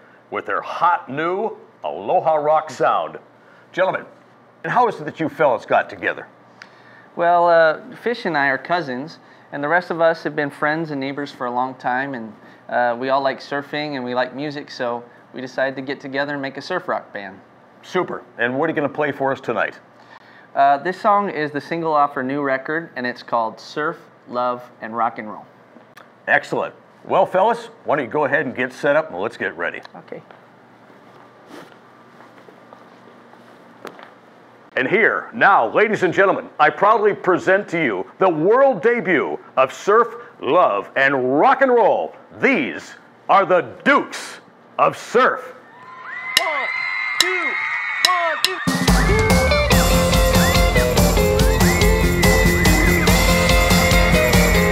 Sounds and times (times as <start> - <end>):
Speech: 0.3 - 6.3, 7.2 - 19.9, 20.6 - 25.5, 26.3 - 30.3, 34.8 - 45.6, 46.4 - 48.6.